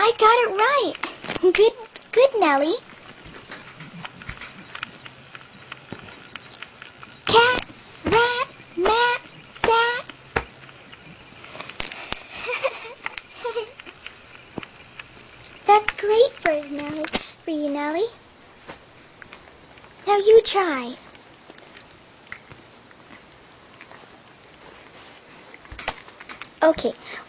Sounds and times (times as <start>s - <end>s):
Child speech, kid speaking: 0.0s - 2.8s, 7.3s - 10.1s, 15.6s - 18.2s, 20.0s - 21.0s, 26.6s - 27.0s
Inside, small room: 0.0s - 27.2s.